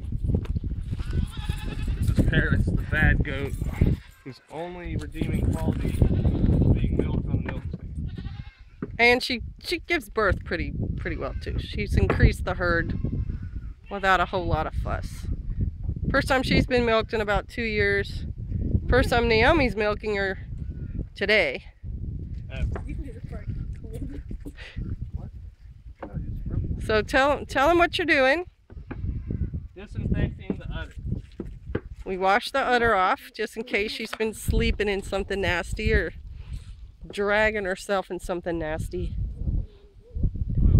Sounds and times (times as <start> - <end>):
Bleat: 0.9 - 2.3, 3.7 - 4.5, 5.8 - 6.8, 8.0 - 8.8, 11.1 - 11.7, 12.8 - 14.2, 29.1 - 29.5.